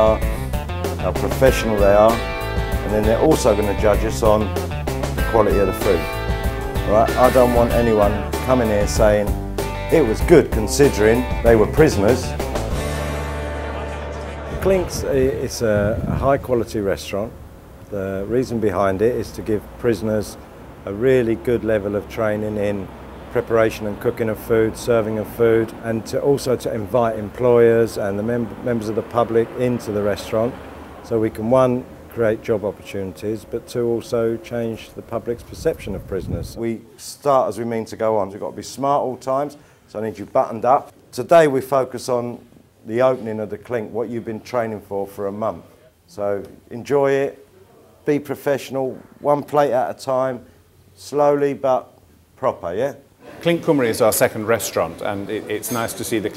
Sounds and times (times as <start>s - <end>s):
Speech: 0.0s - 0.3s, 1.0s - 2.2s, 2.8s - 4.5s, 5.2s - 6.1s, 6.9s - 12.4s, 13.8s - 56.3s
Music: 0.0s - 15.8s.